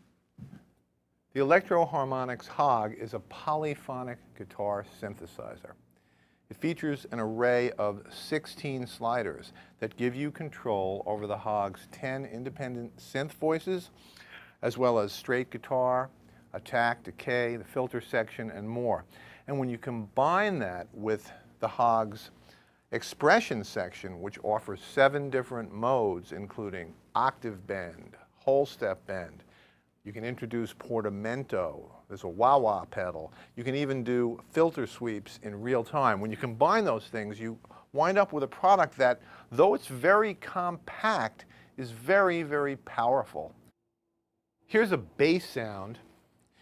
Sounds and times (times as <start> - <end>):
Speech: 1.3 - 5.8, 6.5 - 14.0, 14.6 - 43.6, 44.7 - 46.1.